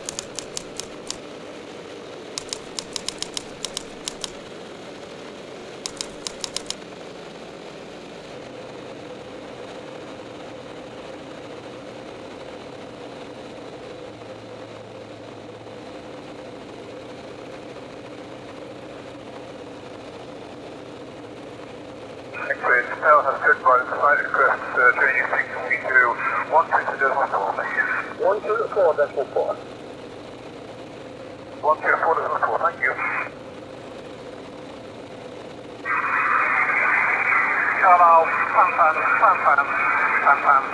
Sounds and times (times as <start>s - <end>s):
Vehicle: 0.0s - 40.7s.